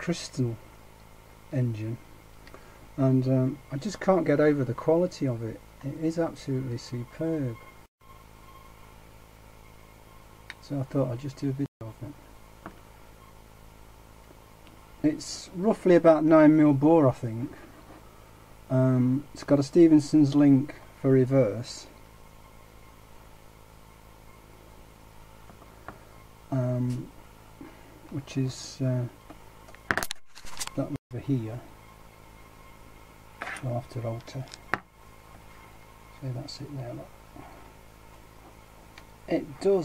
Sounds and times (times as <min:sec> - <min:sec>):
Speech: 0:00.0 - 0:00.6, 0:01.5 - 0:02.0, 0:03.0 - 0:07.6, 0:10.5 - 0:12.2, 0:15.0 - 0:17.6, 0:18.7 - 0:22.0, 0:26.5 - 0:27.1, 0:28.1 - 0:29.2, 0:30.8 - 0:31.7, 0:33.6 - 0:34.6, 0:36.2 - 0:37.1, 0:39.3 - 0:39.8.